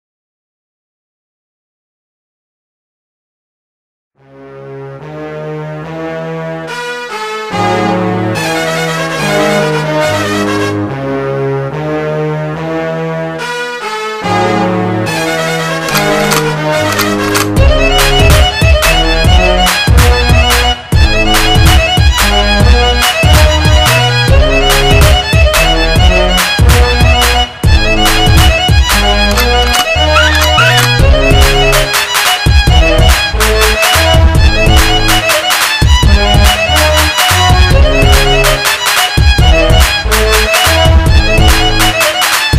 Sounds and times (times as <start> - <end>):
Violin, fiddle: 15.0 - 42.5.